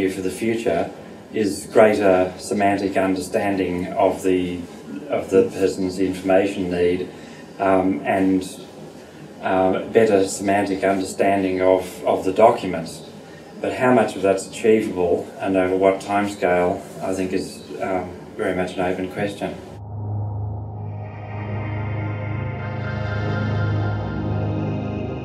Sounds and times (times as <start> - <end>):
Speech: 0.0 - 8.8, 9.4 - 19.8
Music: 19.8 - 25.2.